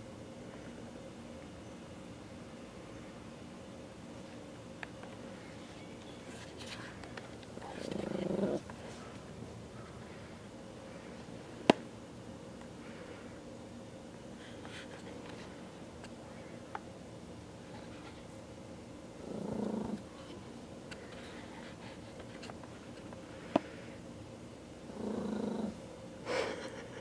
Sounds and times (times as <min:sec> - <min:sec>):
Purr: 0:07.6 - 0:08.7, 0:19.2 - 0:20.1, 0:24.9 - 0:25.8.